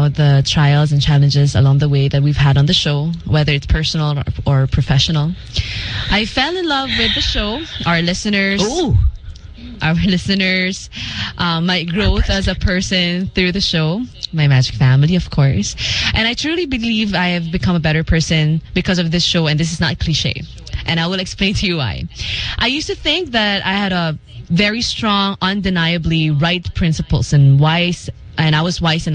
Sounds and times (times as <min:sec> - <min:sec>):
Female speech, woman speaking: 0:00.0 - 0:05.4, 0:06.1 - 0:09.0, 0:09.8 - 0:29.1
Narration, monologue: 0:00.0 - 0:29.1.